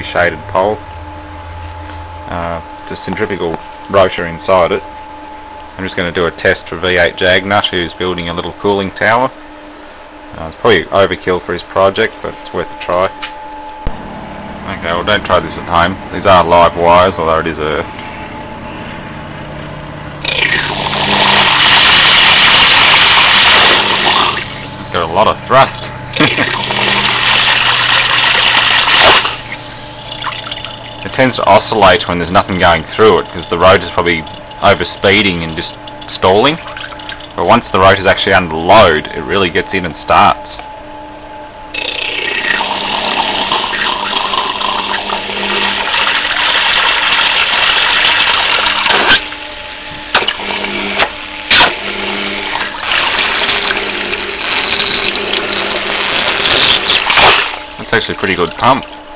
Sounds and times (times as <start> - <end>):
Speech: 0.0 - 0.8, 2.3 - 4.9, 5.8 - 9.4, 10.3 - 13.3, 14.6 - 17.9, 24.9 - 26.5, 31.0 - 36.6, 37.4 - 40.6, 57.8 - 58.9.